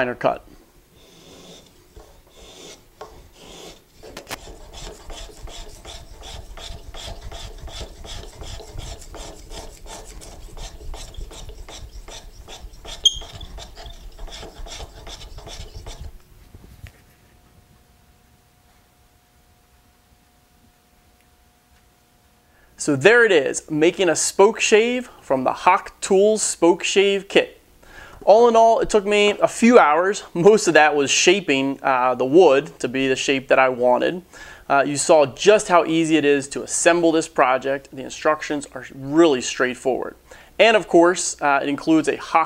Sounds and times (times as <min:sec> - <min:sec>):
Filing (rasp): 0:01.0 - 0:16.2
Rub: 0:01.0 - 0:16.3
Wood: 0:01.2 - 0:16.2.